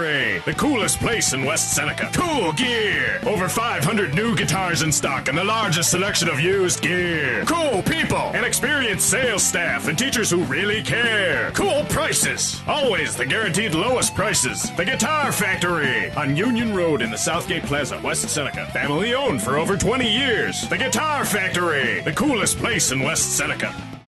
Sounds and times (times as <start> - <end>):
Speech: 0.0 - 23.8.